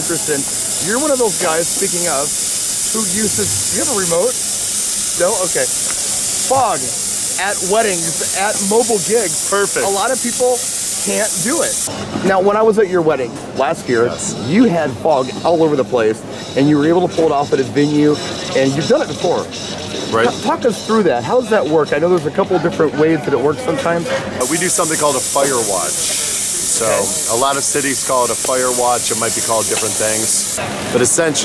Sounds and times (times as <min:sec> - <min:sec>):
Speech: 0:00.0 - 0:02.3, 0:02.9 - 0:04.4, 0:05.2 - 0:05.8, 0:06.5 - 0:31.4.